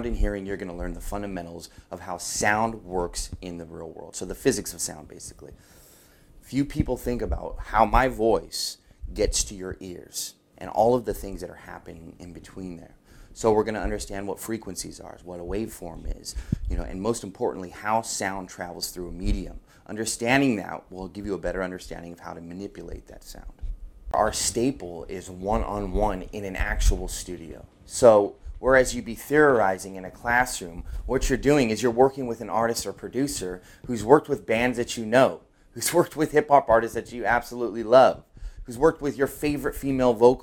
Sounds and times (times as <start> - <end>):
Speech: 0.0 - 5.6, 6.4 - 40.4.